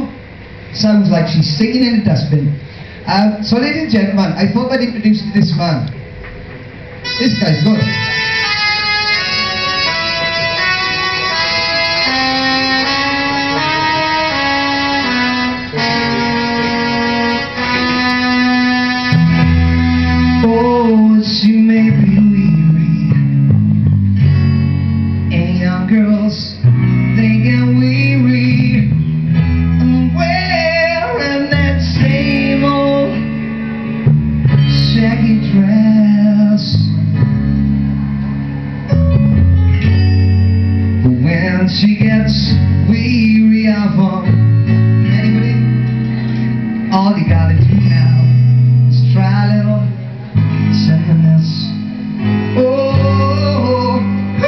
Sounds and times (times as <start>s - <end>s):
Music: 0.0s - 54.4s
Male singing: 20.3s - 23.3s, 25.3s - 29.0s, 29.8s - 33.4s, 34.7s - 37.0s, 41.0s - 45.9s, 46.9s - 50.0s, 50.7s - 51.8s, 52.5s - 54.4s.